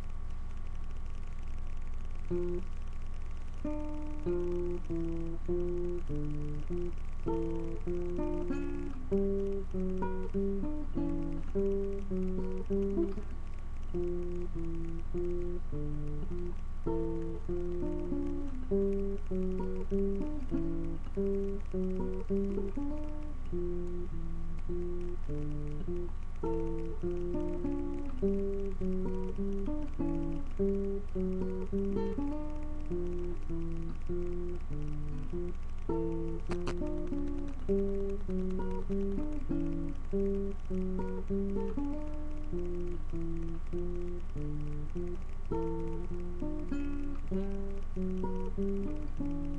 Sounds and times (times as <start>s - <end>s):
Acoustic guitar: 0.0s - 49.5s.